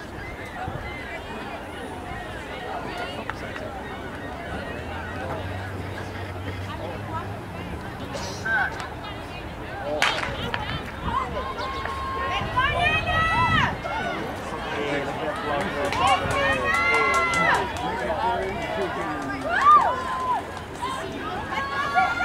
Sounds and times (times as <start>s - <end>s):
Outside, urban or manmade: 0.0s - 22.2s.